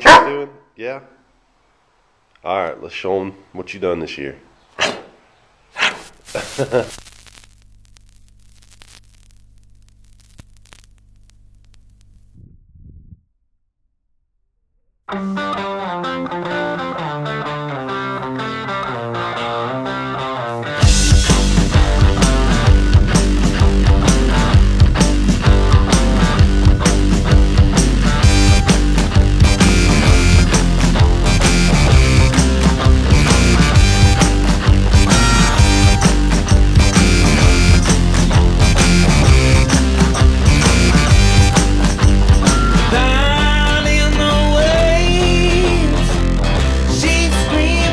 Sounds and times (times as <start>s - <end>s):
Music: 15.1s - 47.9s.